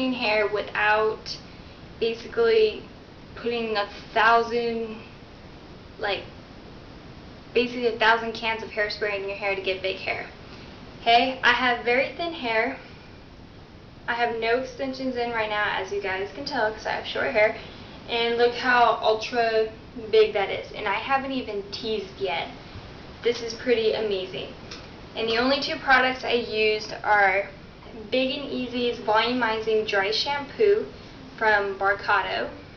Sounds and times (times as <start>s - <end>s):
Speech: 0.0s - 1.4s, 2.0s - 5.1s, 6.0s - 6.3s, 7.6s - 10.4s, 11.0s - 12.9s, 14.1s - 22.6s, 23.2s - 24.6s, 25.2s - 32.6s.